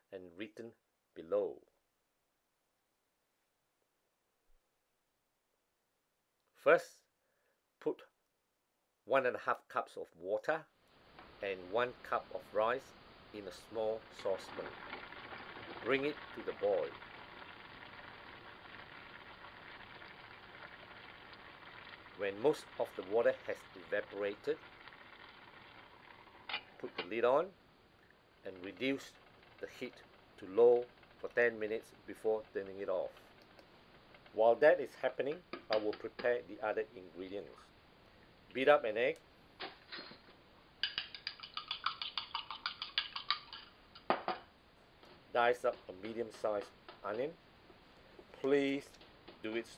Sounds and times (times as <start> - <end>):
Speech: 0.1 - 1.7, 6.6 - 7.1, 7.8 - 8.1, 9.1 - 10.7, 11.4 - 14.7, 15.8 - 17.0, 22.2 - 24.6, 26.8 - 27.6, 28.5 - 33.2, 34.4 - 37.7, 38.5 - 39.2, 45.3 - 47.4, 48.3 - 49.7.